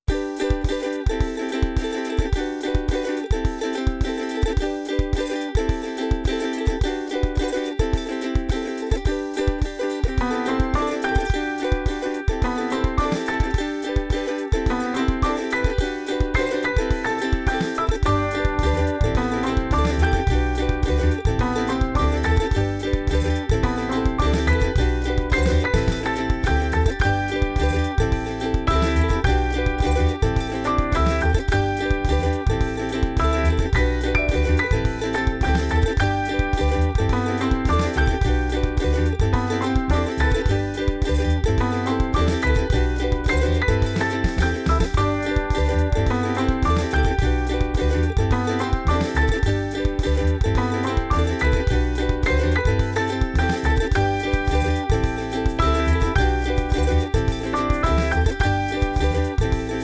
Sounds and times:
Music: 0:00.0 - 0:59.8.

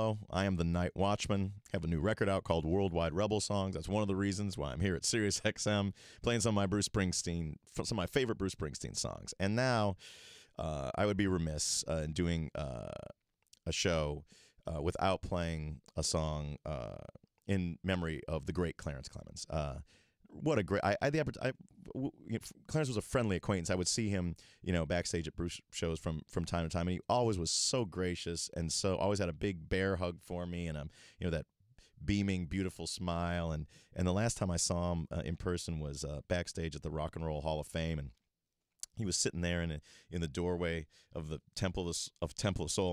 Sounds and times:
Speech: 0:00.0 - 0:10.0, 0:10.6 - 0:38.2, 0:38.8 - 0:42.9.

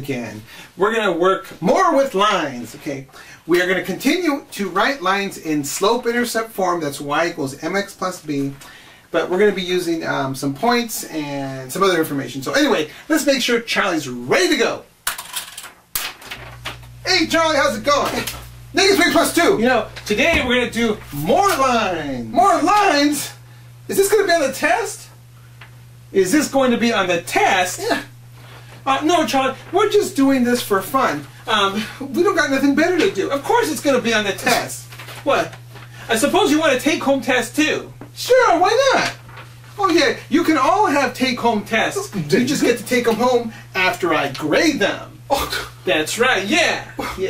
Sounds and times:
Speech: 0:00.0 - 0:14.9, 0:17.0 - 0:25.2, 0:26.1 - 0:28.1, 0:28.8 - 0:47.2.

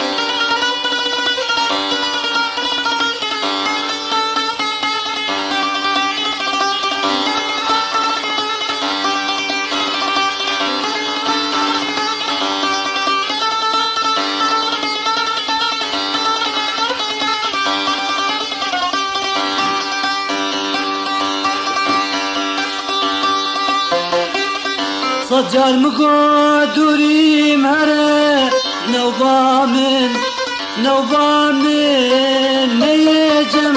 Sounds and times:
Music: 0:00.0 - 0:33.7.

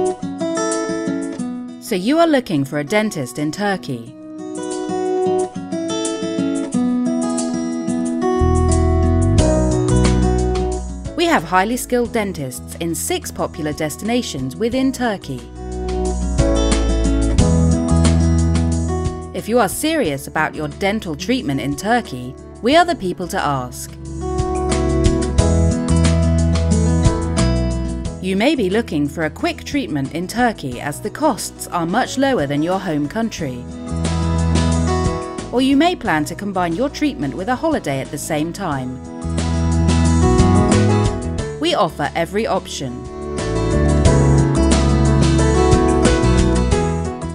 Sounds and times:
Music: 0:00.0 - 0:47.3
Speech: 0:01.8 - 0:04.2, 0:11.2 - 0:15.5, 0:19.4 - 0:24.0, 0:28.2 - 0:33.6, 0:35.5 - 0:39.0, 0:41.6 - 0:43.1.

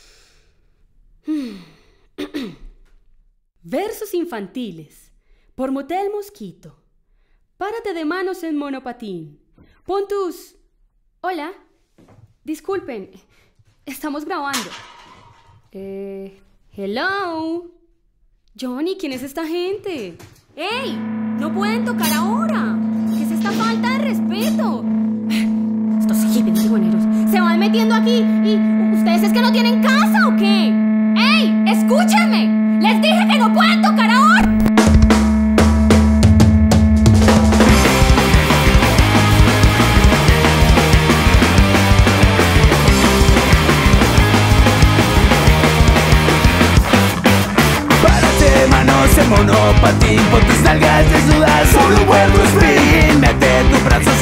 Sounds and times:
Speech: 0:03.6 - 0:06.8, 0:07.6 - 0:10.6, 0:11.2 - 0:11.7, 0:12.4 - 0:13.2, 0:13.9 - 0:14.8, 0:15.7 - 0:17.8, 0:18.6 - 0:34.6.

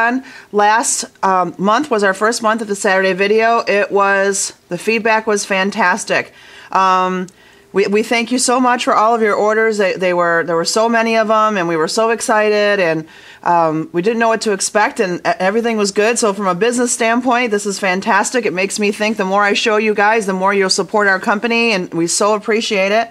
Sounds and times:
Speech: 0:00.0 - 0:23.1.

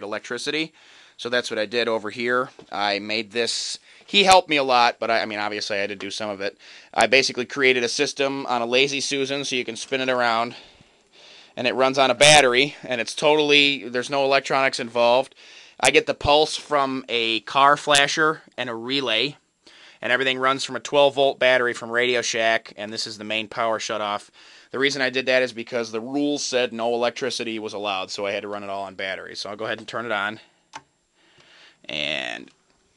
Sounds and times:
Speech: 0:00.0 - 0:10.6, 0:11.6 - 0:19.4, 0:20.0 - 0:30.5, 0:31.8 - 0:32.6.

